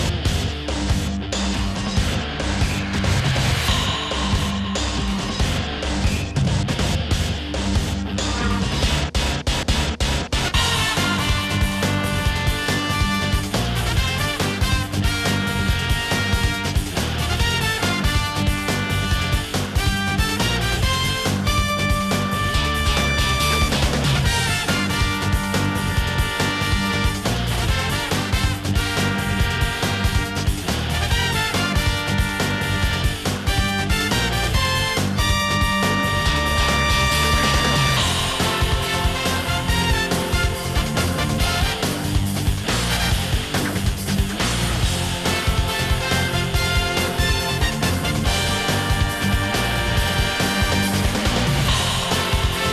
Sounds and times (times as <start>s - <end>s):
Music: 0.0s - 52.7s.